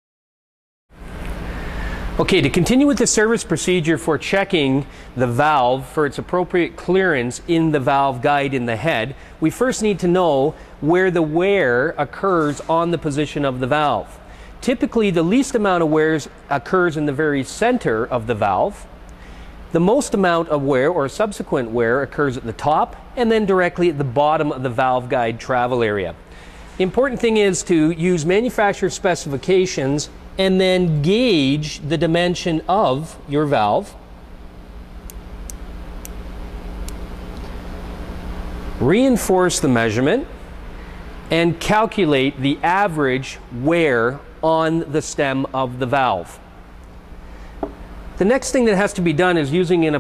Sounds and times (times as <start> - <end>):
Speech: 2.2 - 18.9, 19.7 - 26.2, 26.8 - 34.0, 38.8 - 40.4, 41.3 - 46.4, 48.2 - 50.0.